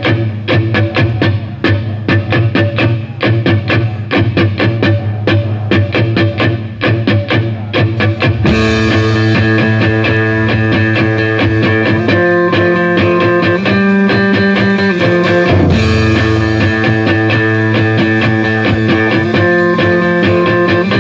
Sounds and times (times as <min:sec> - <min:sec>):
Music: 0:00.0 - 0:21.0.